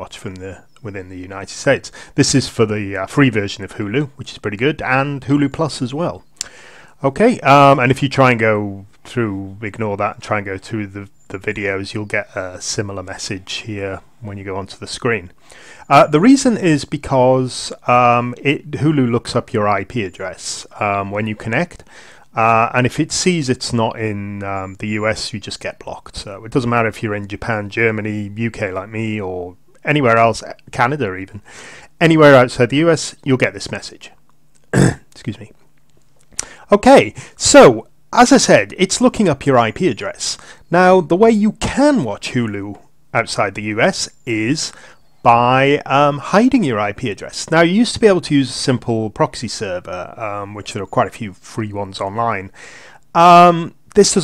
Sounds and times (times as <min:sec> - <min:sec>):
Speech: 0:00.0 - 0:06.3, 0:07.0 - 0:35.6, 0:36.4 - 0:54.2.